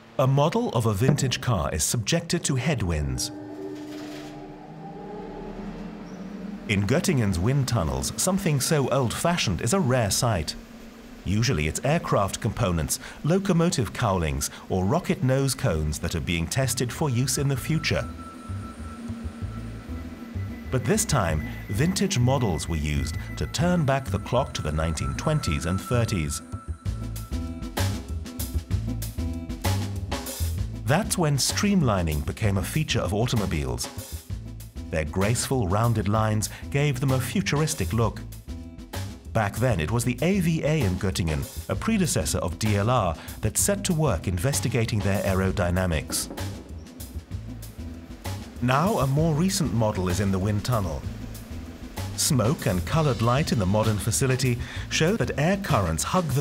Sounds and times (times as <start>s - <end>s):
Speech: 0.2s - 3.4s, 6.7s - 10.6s, 11.2s - 18.1s, 20.7s - 26.4s, 30.9s - 34.0s, 34.9s - 38.2s, 39.4s - 46.3s, 48.6s - 51.1s, 52.2s - 56.4s
Music: 1.0s - 56.4s.